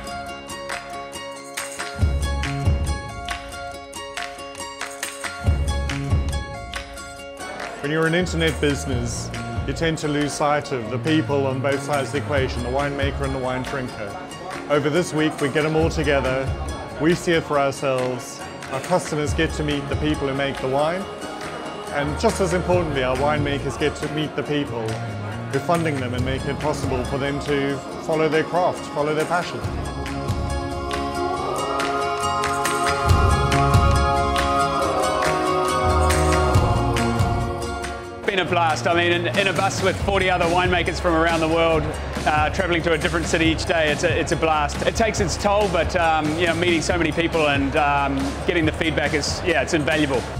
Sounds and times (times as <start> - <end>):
Music: 0.0 - 50.3
Speech: 7.8 - 21.1, 21.9 - 29.7, 38.3 - 50.3.